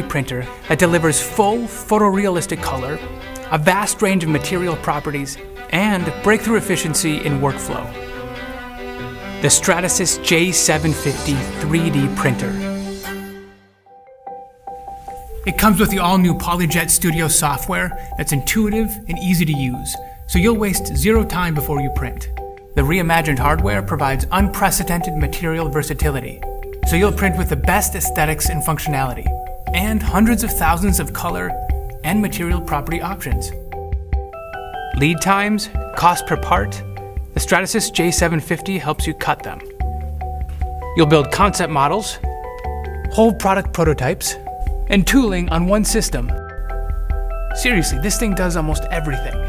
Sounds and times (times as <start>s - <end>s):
Speech: 0.0s - 8.0s, 9.4s - 12.6s, 15.5s - 33.6s, 35.0s - 39.7s, 41.0s - 42.3s, 43.1s - 46.4s, 47.6s - 49.4s
Music: 0.0s - 49.4s.